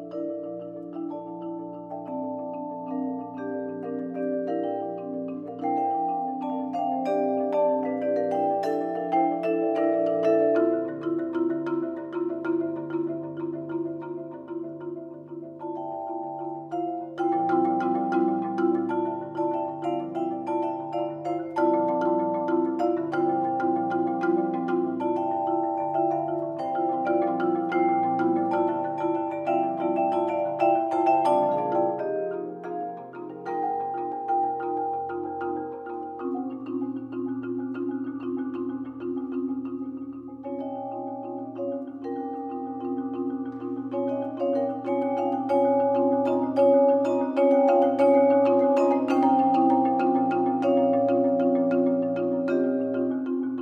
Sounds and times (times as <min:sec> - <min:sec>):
Glockenspiel: 0:00.0 - 0:53.6
Marimba, xylophone: 0:00.0 - 0:53.6.